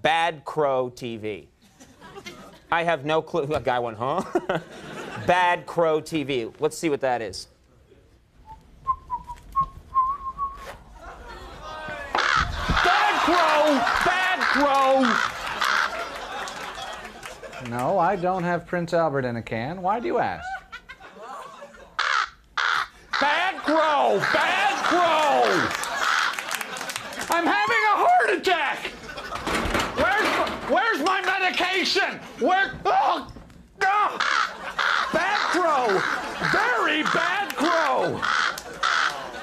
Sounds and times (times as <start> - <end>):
Speech: 0.0 - 1.5, 2.7 - 4.3, 5.2 - 7.6, 12.8 - 15.2, 17.6 - 20.5, 23.2 - 25.7, 27.3 - 28.9, 30.0 - 34.2, 35.1 - 38.2
Caw: 12.2 - 12.9, 13.8 - 16.0, 22.0 - 23.3, 25.6 - 26.4, 34.2 - 37.3, 38.2 - 39.3.